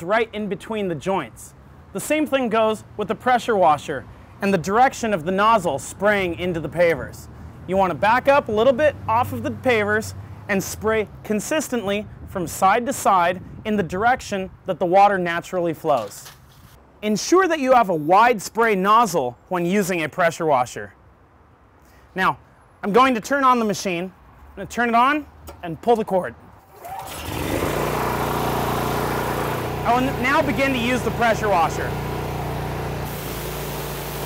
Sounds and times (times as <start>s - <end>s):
Speech: 0.0s - 16.2s, 17.0s - 21.0s, 22.2s - 26.4s, 29.8s - 31.9s.